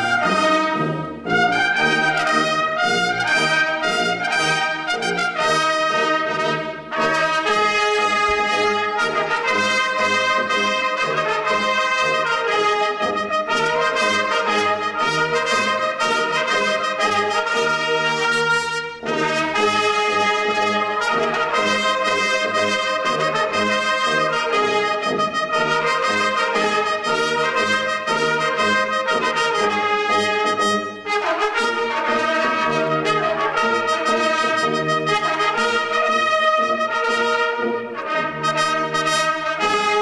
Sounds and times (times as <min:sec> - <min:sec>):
French horn: 0:00.0 - 0:40.0
Orchestra: 0:00.0 - 0:40.0
Trumpet: 0:00.0 - 0:40.0.